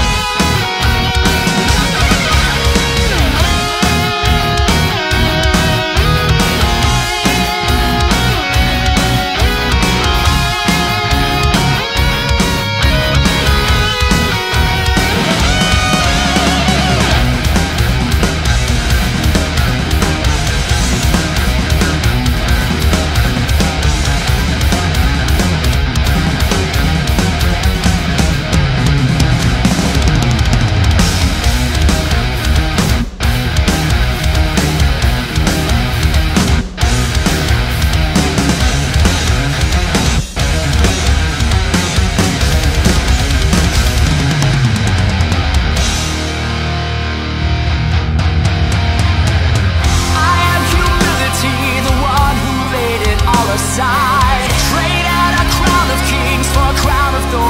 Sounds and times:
Heavy metal: 0:00.0 - 0:57.5.

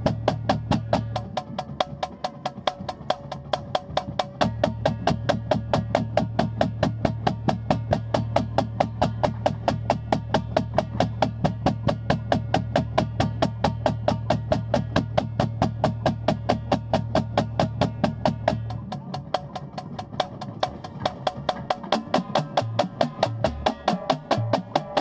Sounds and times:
Music: 0:00.0 - 0:25.0.

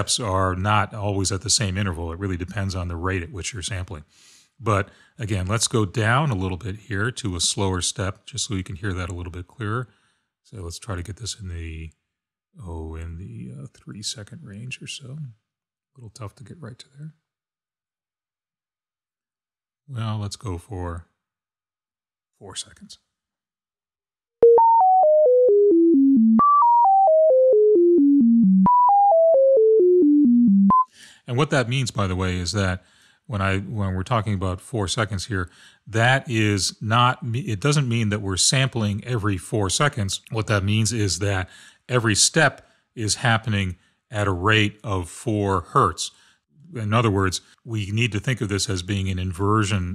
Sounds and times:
Speech: 0:00.0 - 0:09.9, 0:10.5 - 0:12.0, 0:12.6 - 0:15.4, 0:16.0 - 0:17.2, 0:19.9 - 0:21.1, 0:22.4 - 0:23.1, 0:31.2 - 0:49.9
Synthesizer: 0:24.4 - 0:30.9.

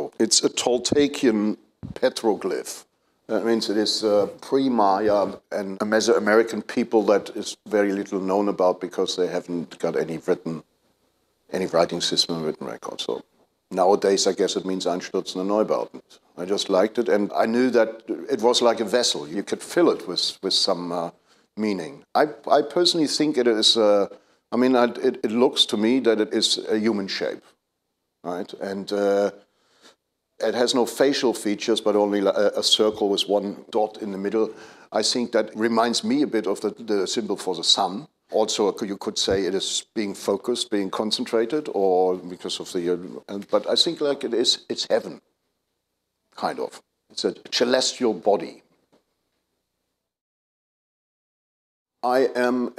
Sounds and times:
Speech: 0:00.0 - 0:10.7, 0:11.5 - 0:27.6, 0:28.2 - 0:29.5, 0:30.4 - 0:45.3, 0:46.4 - 0:48.7, 0:52.0 - 0:52.7.

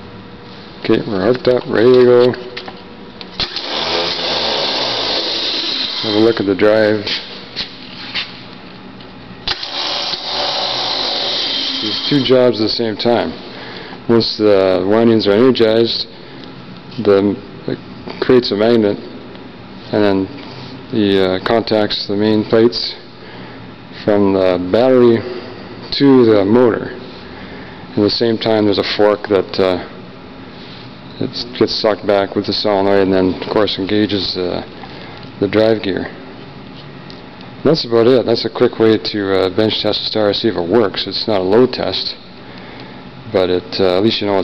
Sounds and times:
Speech: 0:00.8 - 0:02.5, 0:06.0 - 0:07.2, 0:11.8 - 0:13.4, 0:14.1 - 0:16.1, 0:17.0 - 0:19.1, 0:19.9 - 0:23.1, 0:24.0 - 0:25.3, 0:25.9 - 0:27.0, 0:28.0 - 0:30.0, 0:31.2 - 0:34.7, 0:35.4 - 0:36.2, 0:37.6 - 0:42.2, 0:43.3 - 0:44.4.

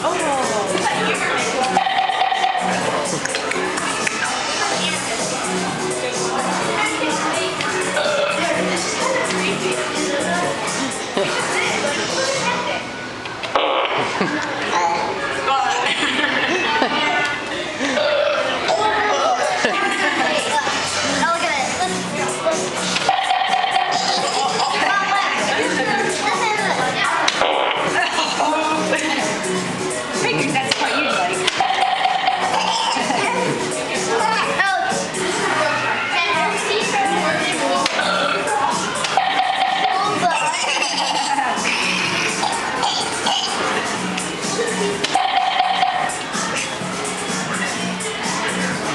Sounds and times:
Speech: 0:00.0 - 0:01.8, 0:02.8 - 0:13.0, 0:24.0 - 0:29.4, 0:32.9 - 0:39.0
Children playing: 0:00.0 - 0:48.9.

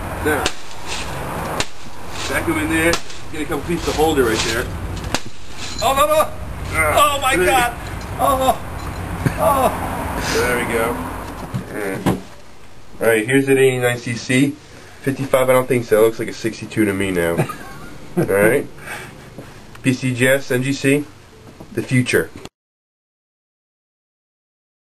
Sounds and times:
Outside, urban or manmade: 0:00.0 - 0:22.5
Speech: 0:02.3 - 0:04.7, 0:05.8 - 0:08.6, 0:13.0 - 0:17.4, 0:19.8 - 0:21.1, 0:21.8 - 0:22.4.

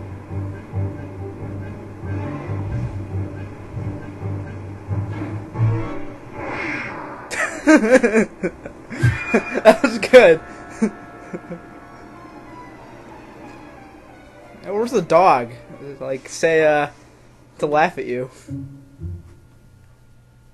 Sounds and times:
Music: 0:00.0 - 0:06.3, 0:09.0 - 0:17.0, 0:18.4 - 0:20.2
Speech: 0:14.6 - 0:17.0, 0:17.6 - 0:18.4.

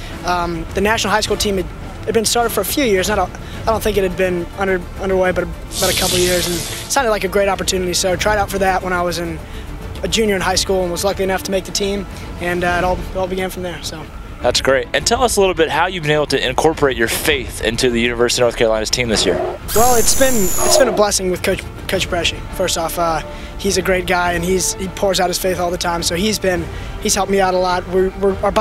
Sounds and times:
Music: 0:00.0 - 0:28.6
Speech: 0:00.2 - 0:09.4, 0:10.0 - 0:28.6.

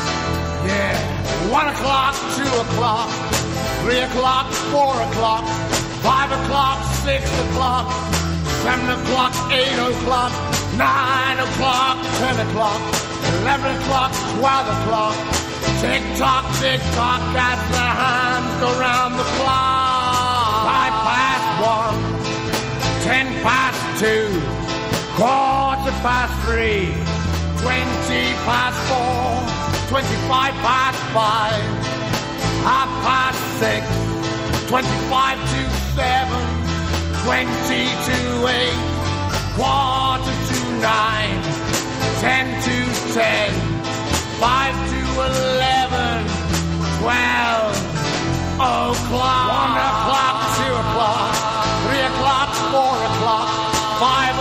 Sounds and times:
Music: 0:00.0 - 0:54.4.

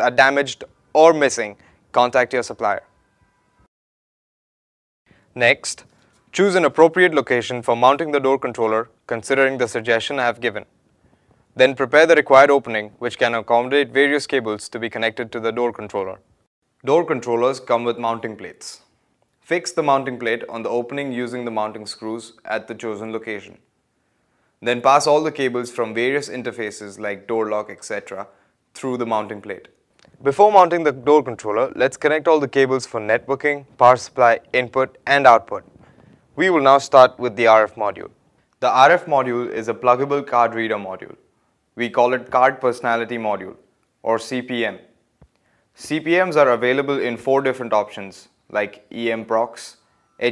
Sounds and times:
Speech: 0:00.0 - 0:02.9, 0:05.4 - 0:10.7, 0:11.6 - 0:16.2, 0:16.8 - 0:23.7, 0:24.6 - 0:35.7, 0:36.4 - 0:45.0, 0:45.8 - 0:50.3.

